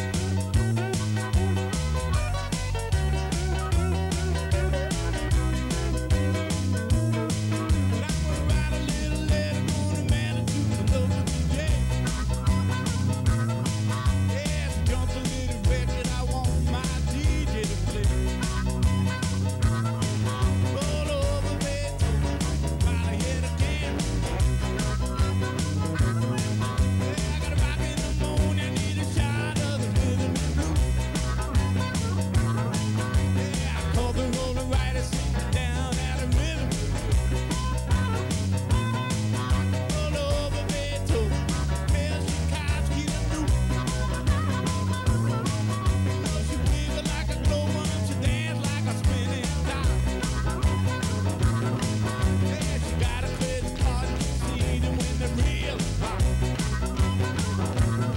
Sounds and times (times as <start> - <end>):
Blues: 0.0 - 58.1.